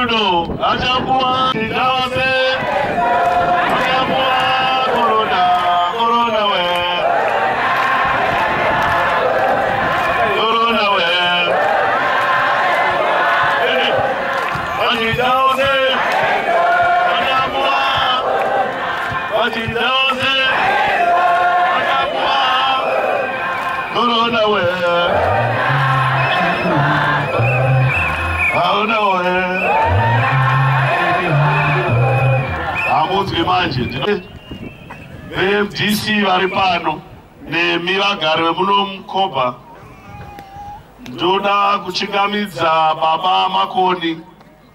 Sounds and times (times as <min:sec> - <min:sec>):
Male speech, man speaking: 0:00.0 - 0:01.3, 0:32.9 - 0:34.3, 0:35.4 - 0:37.0, 0:38.0 - 0:39.6, 0:43.4 - 0:44.3.